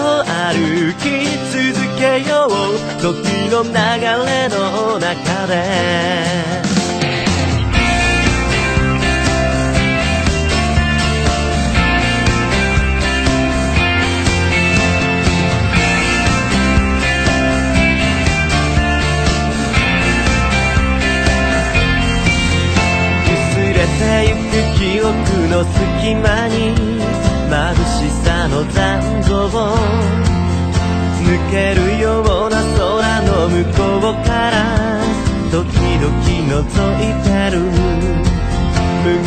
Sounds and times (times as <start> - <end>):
Music: 0.0 - 39.2.